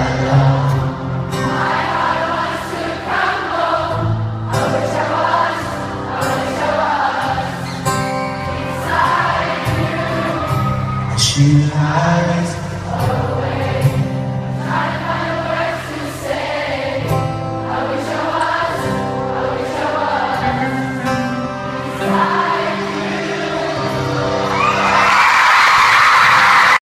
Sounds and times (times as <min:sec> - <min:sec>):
Choir: 0:00.0 - 0:26.8.